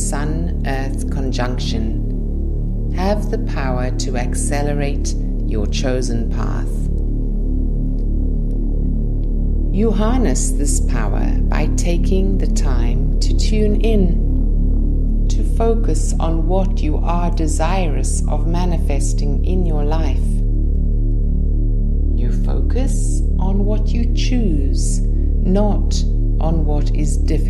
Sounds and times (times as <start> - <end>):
Speech: 0.0 - 2.0, 3.0 - 6.9, 9.8 - 14.2, 15.3 - 20.4, 22.2 - 27.5
Music: 0.0 - 27.5.